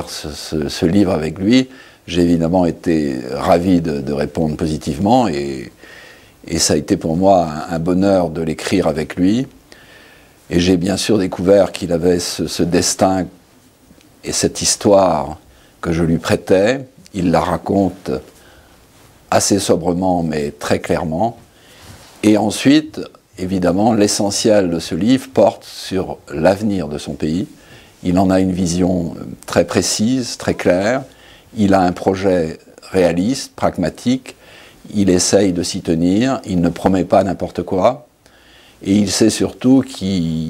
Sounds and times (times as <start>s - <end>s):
Speech: 0.0s - 5.8s, 6.4s - 9.6s, 10.5s - 13.4s, 14.2s - 18.4s, 19.3s - 21.4s, 22.2s - 38.1s, 38.8s - 40.4s.